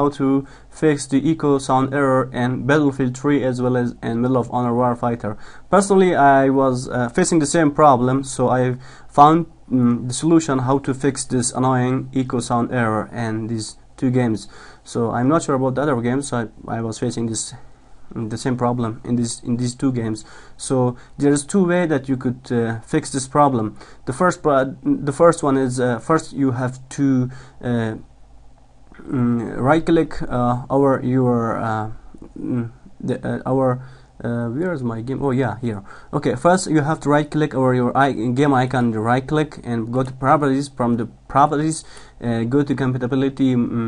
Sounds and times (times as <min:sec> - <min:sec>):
Speech: 0:00.0 - 0:28.1, 0:29.0 - 0:43.8.